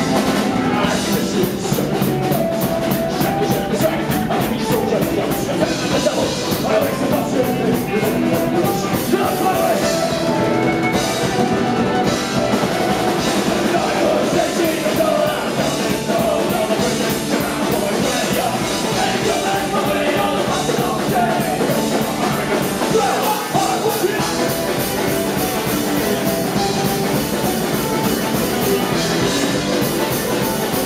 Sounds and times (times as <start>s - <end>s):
Music: 0.0s - 30.8s.